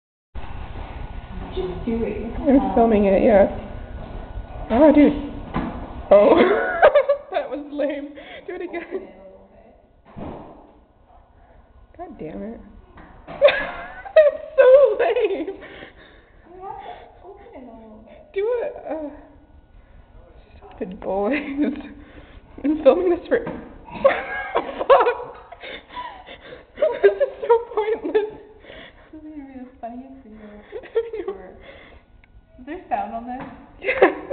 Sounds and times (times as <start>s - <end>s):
Giggle: 6.3s - 7.3s, 13.4s - 15.6s, 23.9s - 28.5s, 33.8s - 34.3s.